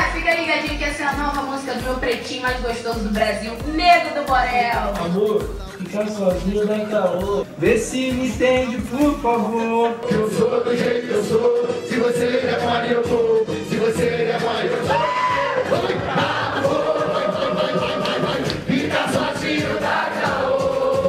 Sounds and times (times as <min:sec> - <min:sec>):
Music: 0:00.0 - 0:21.0.